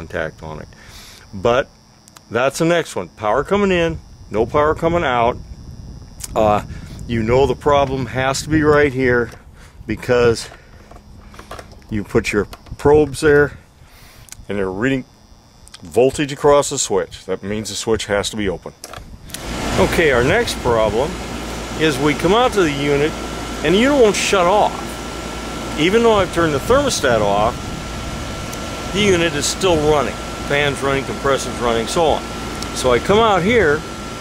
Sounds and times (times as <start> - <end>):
Speech: 0.0 - 0.7, 1.3 - 1.7, 2.3 - 5.4, 6.2 - 10.6, 11.9 - 13.6, 14.4 - 15.1, 15.8 - 18.8, 19.8 - 21.2, 21.8 - 24.9, 25.8 - 27.6, 28.9 - 33.8.